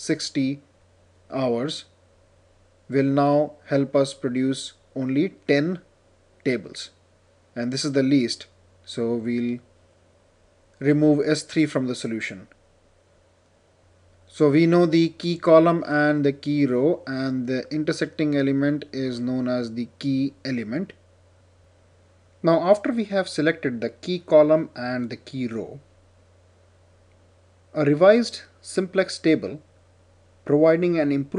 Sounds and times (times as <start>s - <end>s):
Narration, monologue: 0.0s - 31.3s.